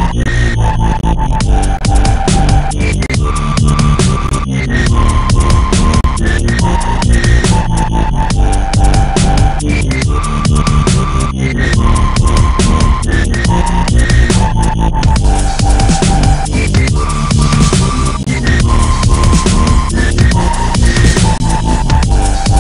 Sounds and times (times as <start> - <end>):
Dubstep: 0.0 - 22.6.